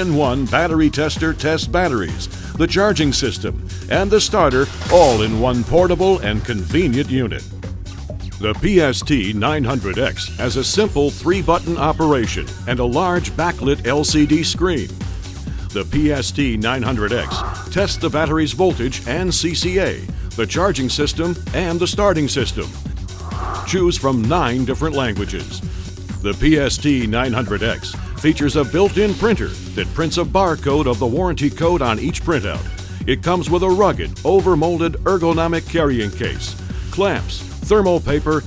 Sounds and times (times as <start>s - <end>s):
Speech: 0.0s - 7.5s, 8.4s - 14.9s, 15.7s - 22.8s, 23.7s - 25.6s, 26.2s - 38.4s
Music: 0.0s - 38.4s.